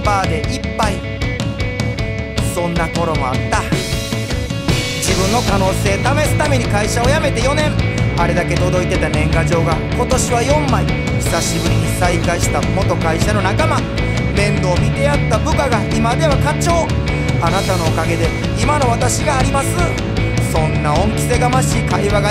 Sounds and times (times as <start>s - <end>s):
Music: 0.0s - 22.3s.